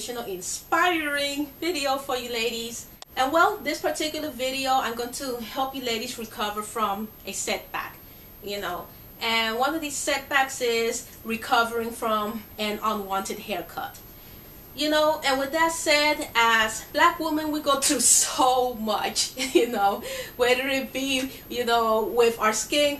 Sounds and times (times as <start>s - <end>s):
Speech: 0.0s - 14.0s, 14.8s - 22.9s.